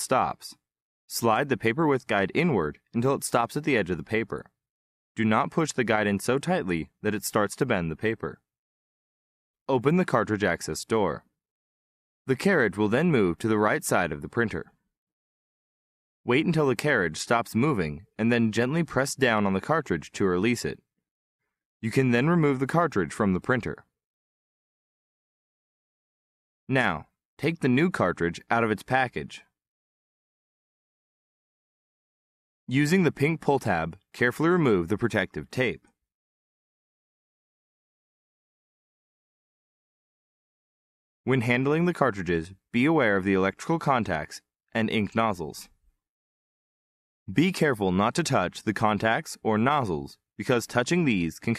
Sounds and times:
Speech: 0:00.0 - 0:04.6, 0:05.2 - 0:08.5, 0:09.7 - 0:11.3, 0:12.3 - 0:14.8, 0:16.3 - 0:20.9, 0:21.8 - 0:23.9, 0:26.7 - 0:29.6, 0:32.7 - 0:36.0, 0:41.3 - 0:45.8, 0:47.3 - 0:51.5.

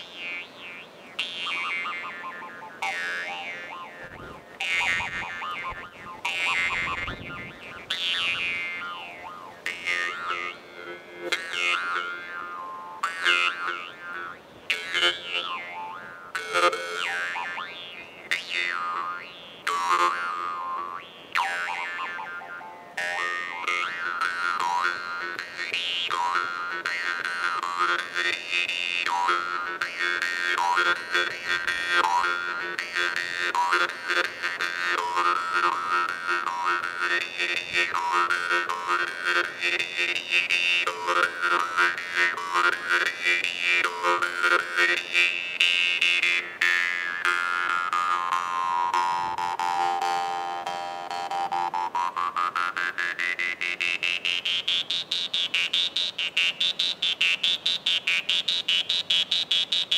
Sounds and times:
Music: 0:00.0 - 0:56.9.

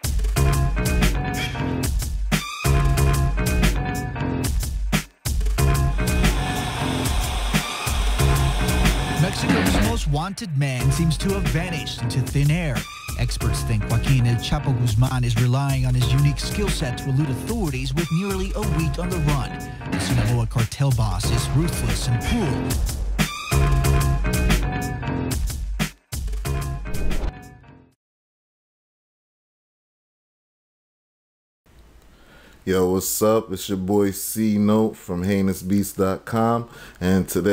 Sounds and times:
Music: 0:00.0 - 0:28.0
Speech: 0:09.2 - 0:22.7, 0:32.7 - 0:37.5.

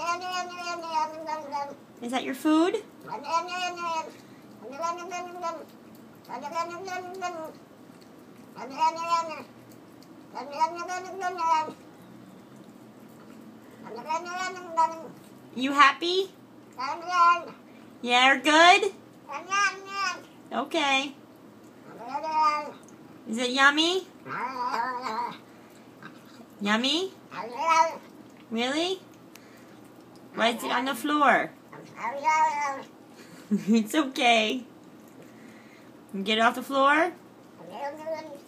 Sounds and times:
Speech: 0:02.0 - 0:02.9, 0:15.6 - 0:16.4, 0:18.0 - 0:19.0, 0:20.5 - 0:21.2, 0:23.3 - 0:24.1, 0:26.6 - 0:27.2, 0:28.5 - 0:29.1, 0:30.4 - 0:31.6, 0:33.7 - 0:34.7, 0:36.1 - 0:37.2.

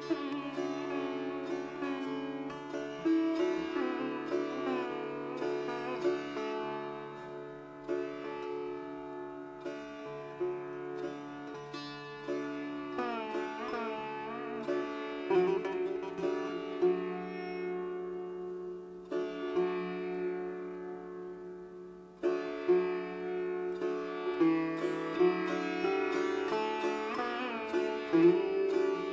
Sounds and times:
Sitar: 0:00.0 - 0:29.1.

